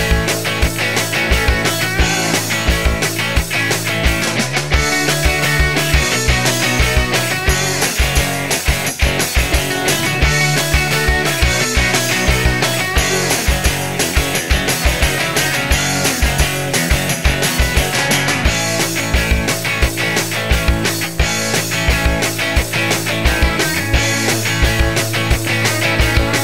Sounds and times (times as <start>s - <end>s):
Music: 0.0s - 26.4s.